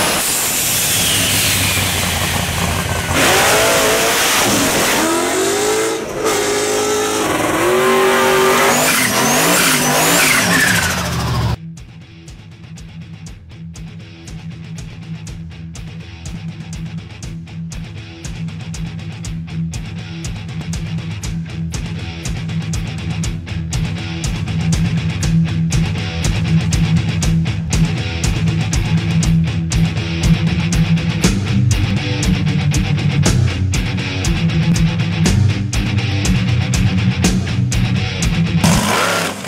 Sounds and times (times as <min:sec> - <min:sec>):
Truck: 0:00.0 - 0:11.6, 0:21.2 - 0:39.4
Music: 0:11.6 - 0:38.8.